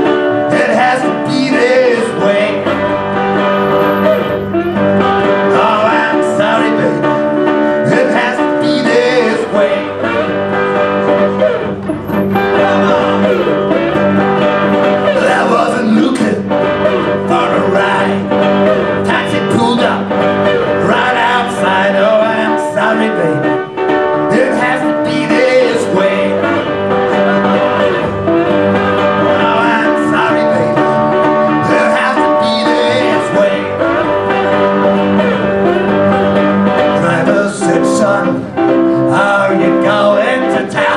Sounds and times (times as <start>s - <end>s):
Blues: 0.0s - 40.9s.